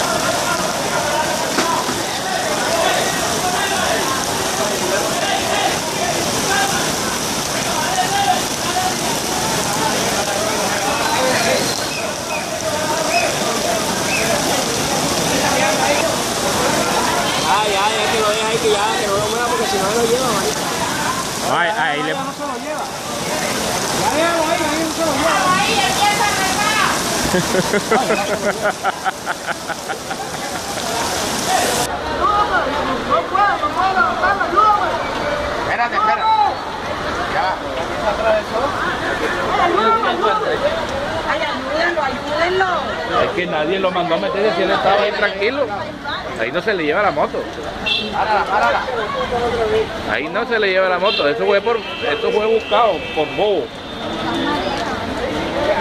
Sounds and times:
Speech: 0:00.0 - 0:27.0, 0:30.2 - 0:55.8
Chatter: 0:00.0 - 0:55.8.

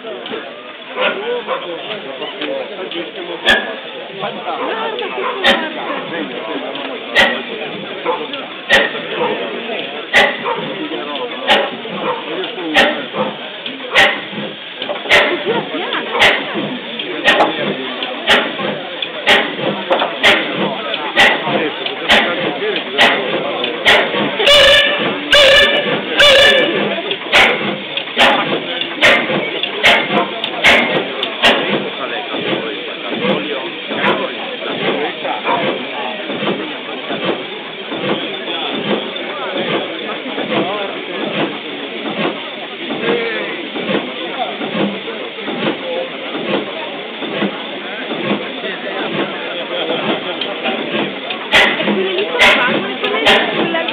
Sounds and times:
Engine: 0:00.0 - 0:53.9
Speech: 0:00.0 - 0:53.9.

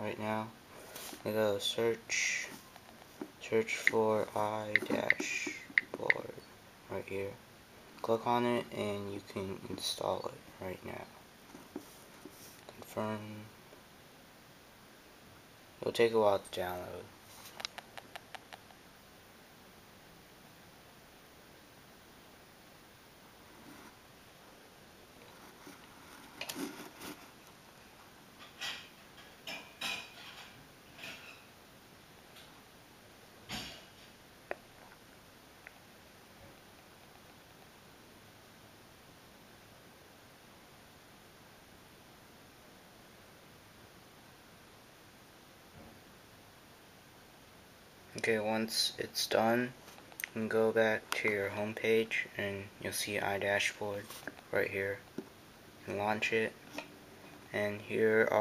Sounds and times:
Speech: 0:00.0 - 0:00.6, 0:01.2 - 0:02.6, 0:03.4 - 0:07.4, 0:08.0 - 0:11.2, 0:12.7 - 0:13.6, 0:15.8 - 0:17.1, 0:48.1 - 0:55.1, 0:55.8 - 0:56.6, 0:57.5 - 0:58.4.

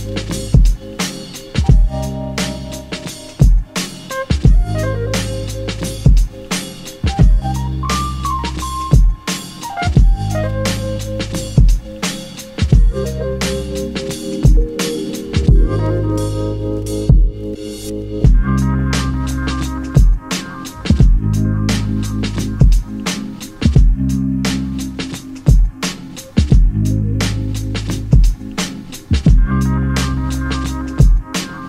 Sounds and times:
Music: 0:00.0 - 0:31.6.

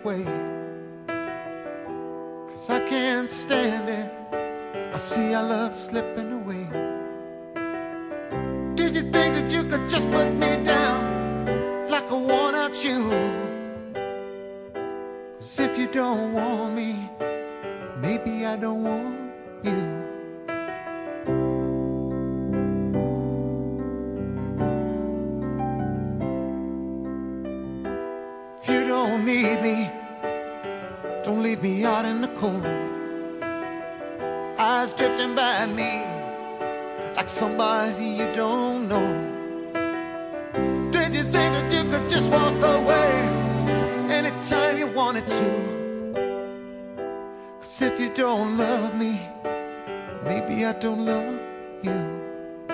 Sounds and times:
Music: 0:00.0 - 0:52.7.

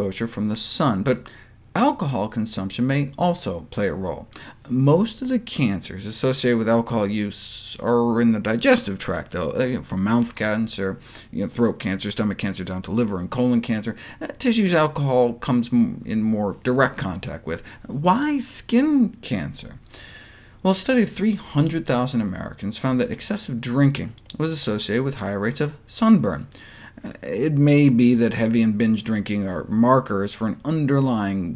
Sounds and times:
Speech: 0:00.0 - 0:19.9, 0:20.6 - 0:31.5.

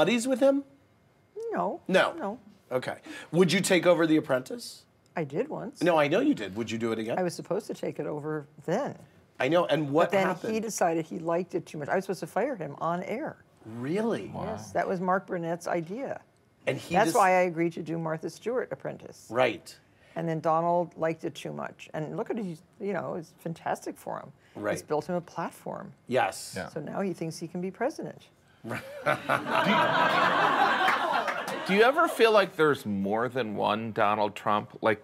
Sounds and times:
Speech: 0:14.2 - 0:14.8, 0:16.7 - 0:17.4.

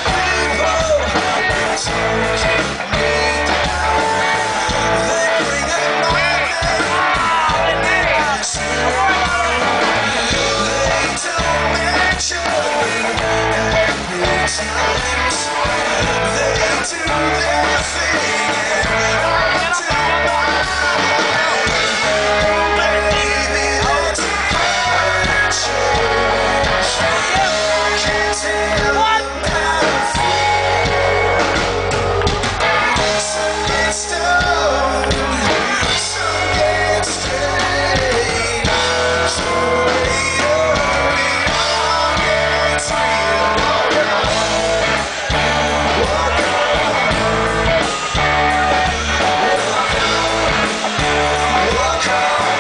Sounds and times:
Music: 0:00.0 - 0:52.6.

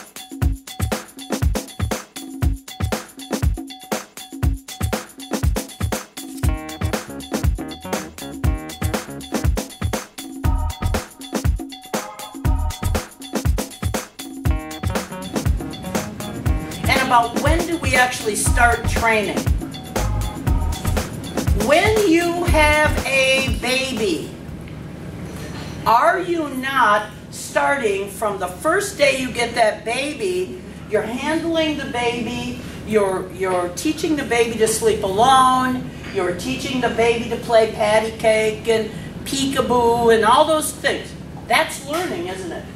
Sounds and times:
Speech: 0:16.9 - 0:19.4, 0:21.6 - 0:24.3, 0:25.9 - 0:42.7.

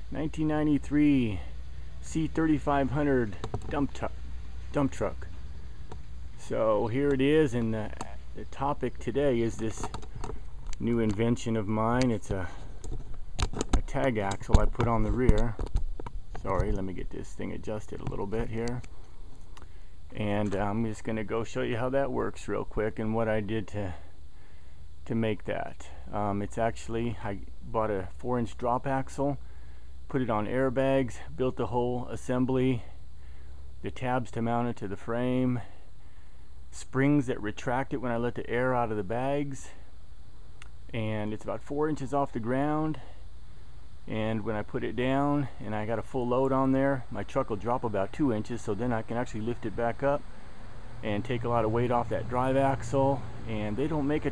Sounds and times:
Speech: 0:00.1 - 0:05.3, 0:06.4 - 0:10.0, 0:10.8 - 0:12.7, 0:13.7 - 0:15.6, 0:16.4 - 0:18.9, 0:20.1 - 0:24.1, 0:25.0 - 0:29.4, 0:30.1 - 0:33.0, 0:33.8 - 0:35.8, 0:36.7 - 0:39.9, 0:40.9 - 0:43.2, 0:44.1 - 0:50.2, 0:51.0 - 0:54.3.

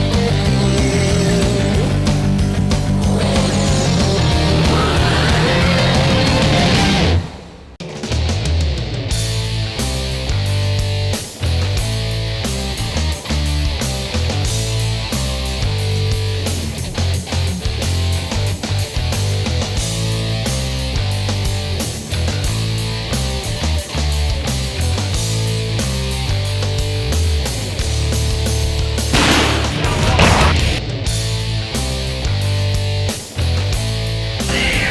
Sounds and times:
Music: 0:00.0 - 0:34.9.

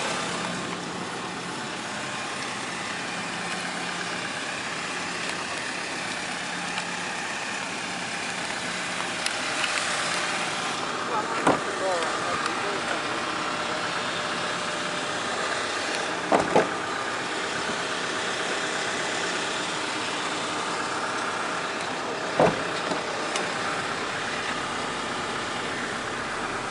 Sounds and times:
Truck: 0:00.0 - 0:26.7.

